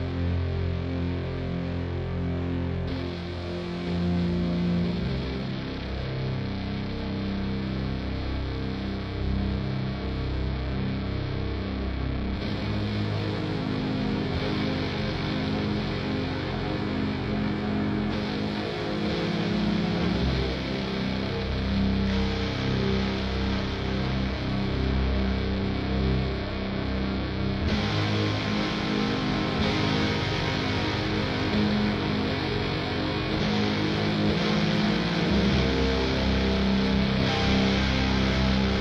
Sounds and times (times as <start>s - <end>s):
Music: 0.0s - 38.8s.